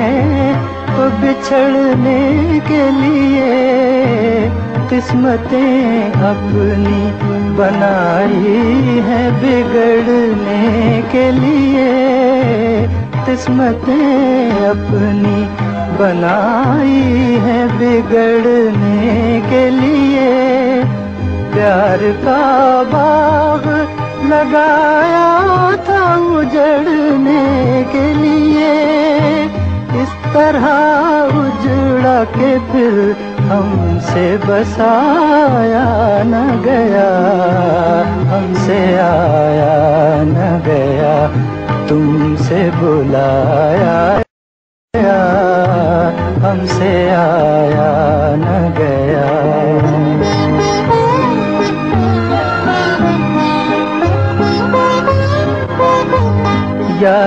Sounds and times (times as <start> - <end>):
Music of Bollywood: 0.0 - 44.3, 45.0 - 57.2.